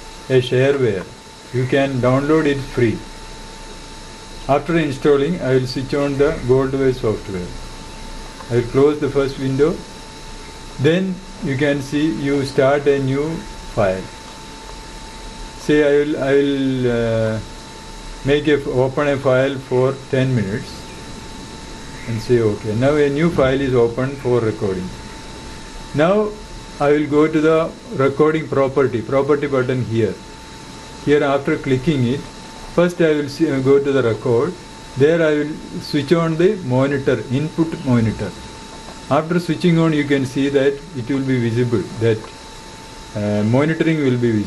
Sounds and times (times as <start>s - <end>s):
Speech: 0.3s - 3.1s, 4.5s - 7.6s, 8.4s - 9.9s, 10.8s - 14.1s, 15.6s - 17.5s, 18.2s - 20.9s, 22.0s - 25.0s, 25.9s - 30.3s, 31.0s - 38.5s, 39.1s - 42.4s, 43.1s - 44.4s.